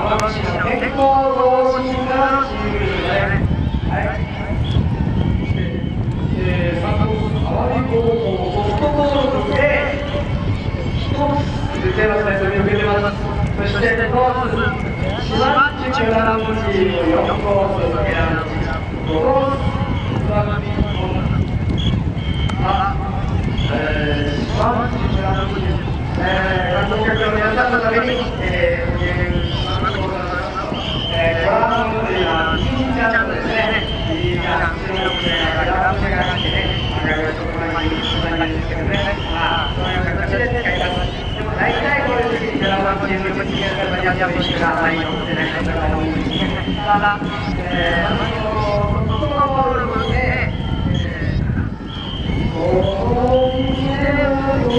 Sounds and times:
Speech: 0:00.0 - 0:04.4, 0:05.6 - 0:21.5, 0:22.6 - 0:51.5, 0:52.5 - 0:54.7.

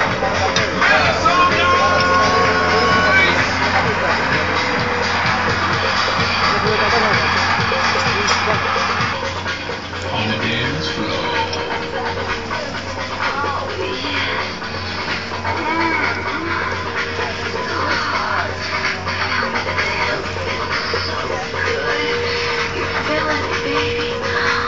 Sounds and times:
Music: 0:00.0 - 0:24.6.

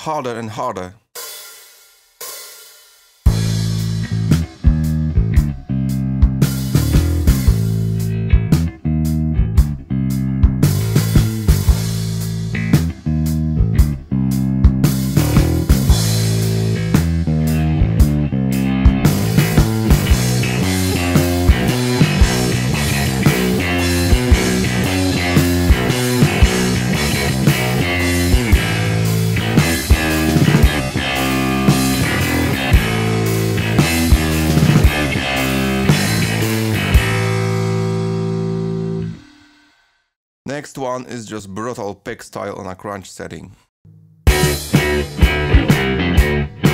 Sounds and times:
Bass guitar: 0:03.3 - 0:39.3, 0:43.9 - 0:46.7
Punk rock: 0:14.6 - 0:39.2, 0:44.3 - 0:46.7.

